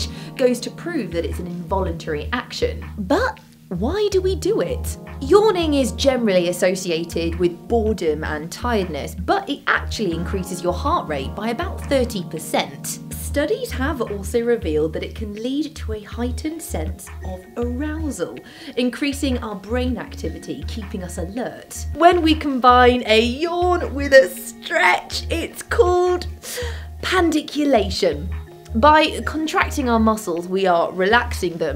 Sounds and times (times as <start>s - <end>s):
Speech: 0.0s - 26.3s, 27.0s - 31.7s
Music: 0.0s - 31.7s.